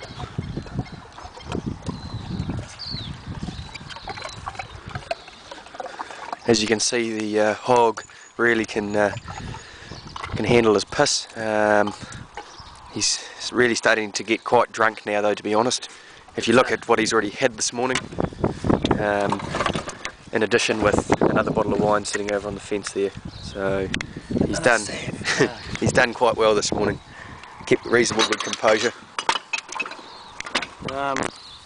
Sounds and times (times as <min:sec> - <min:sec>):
Speech: 0:06.5 - 0:09.2, 0:13.0 - 0:18.0, 0:20.3 - 0:23.9, 0:24.5 - 0:27.0, 0:27.7 - 0:29.0, 0:30.8 - 0:31.3.